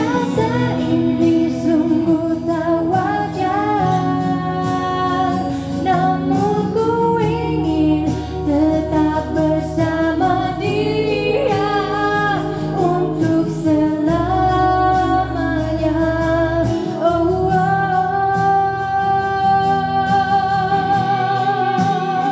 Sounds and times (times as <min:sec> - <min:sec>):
Music: 0:00.0 - 0:22.3
Singing: 0:00.0 - 0:22.3.